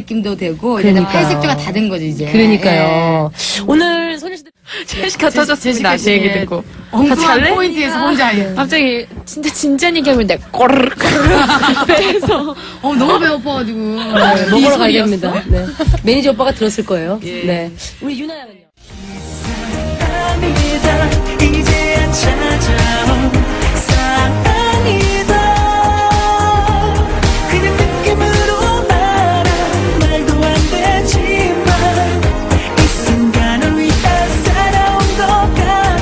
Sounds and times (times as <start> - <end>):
Music: 18.8 - 36.0.